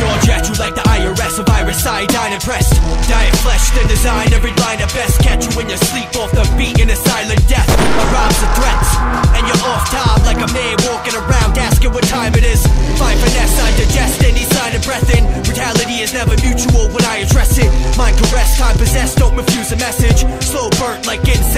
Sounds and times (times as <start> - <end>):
Rhythm and blues: 0.0 - 21.5.